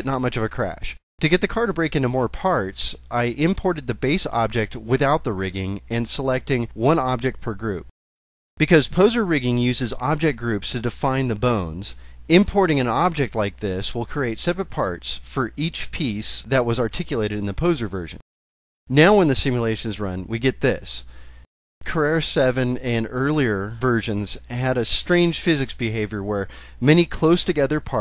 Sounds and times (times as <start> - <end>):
Speech: 0.0 - 7.9, 8.6 - 18.2, 18.9 - 21.1, 21.8 - 28.0.